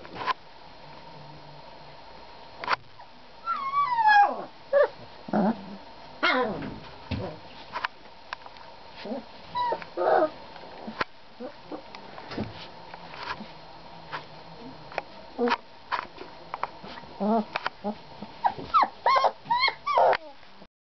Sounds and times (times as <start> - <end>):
Dog: 16.9 - 20.4.